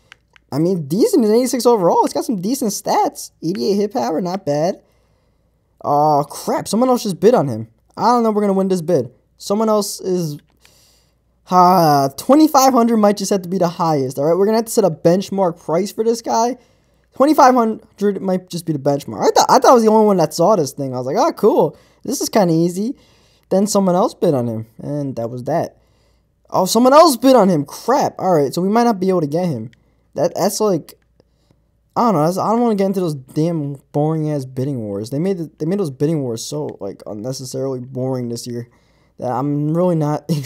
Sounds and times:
Speech: 0:00.5 - 0:04.8, 0:05.8 - 0:10.5, 0:11.5 - 0:16.6, 0:17.2 - 0:25.8, 0:26.5 - 0:31.0, 0:32.0 - 0:40.4.

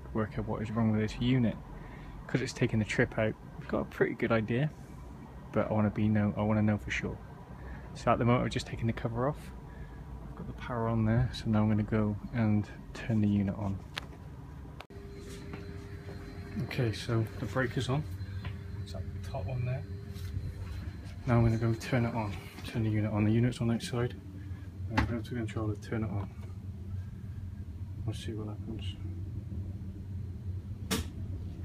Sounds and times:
Speech: 0:00.0 - 0:01.6, 0:02.3 - 0:04.8, 0:05.5 - 0:07.2, 0:08.0 - 0:09.6, 0:10.4 - 0:13.8, 0:16.6 - 0:18.1, 0:18.9 - 0:19.9, 0:21.2 - 0:24.2, 0:24.9 - 0:26.4, 0:28.0 - 0:29.1.

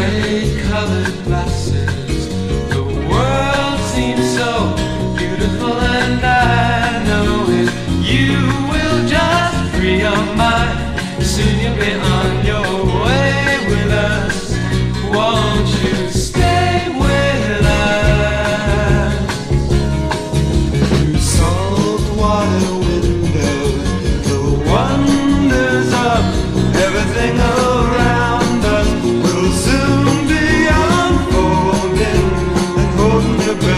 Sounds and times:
Psychedelic rock: 0:00.0 - 0:33.7.

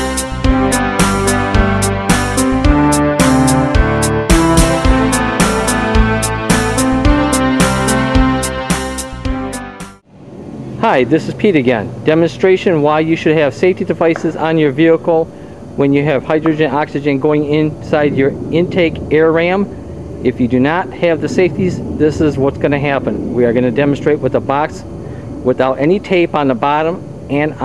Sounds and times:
Speech: 0:10.8 - 0:24.9, 0:25.5 - 0:27.6.

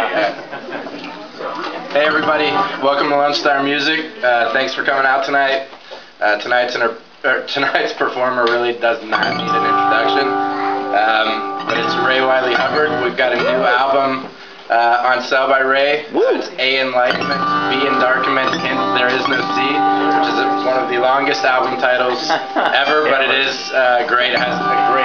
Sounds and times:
Speech: 0:01.0 - 0:10.3, 0:11.0 - 0:25.0
Music: 0:02.0 - 0:03.4, 0:09.1 - 0:14.3, 0:16.8 - 0:25.0.

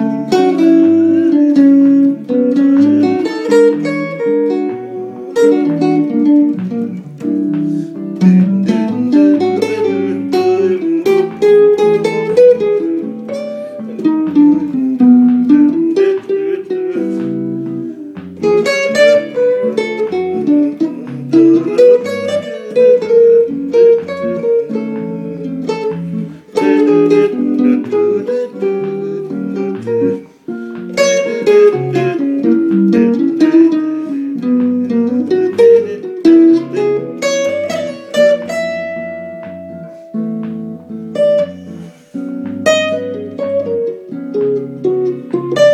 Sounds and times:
Guitar: 0:00.0 - 0:45.7
Inside, small room: 0:00.0 - 0:45.7.

